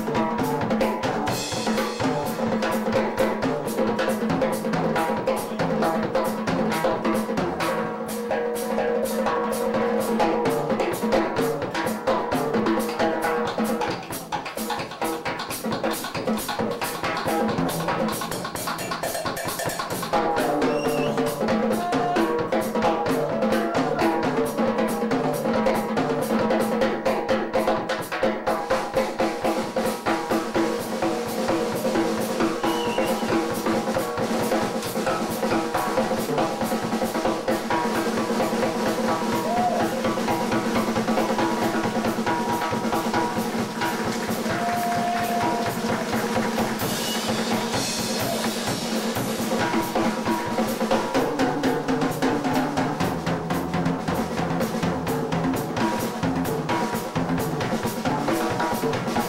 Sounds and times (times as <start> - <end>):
Music: 0.0 - 59.2.